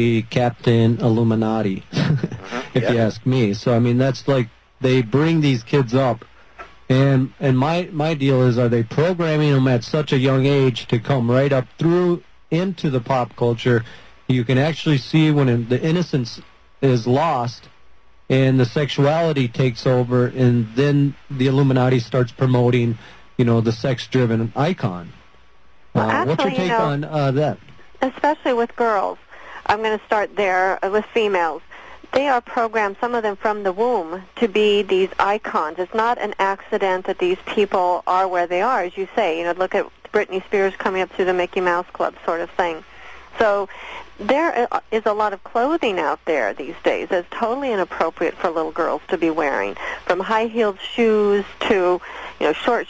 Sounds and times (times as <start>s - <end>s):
Speech: 0.0s - 6.3s, 6.9s - 17.7s, 18.3s - 25.2s, 26.0s - 42.8s, 43.4s - 52.9s.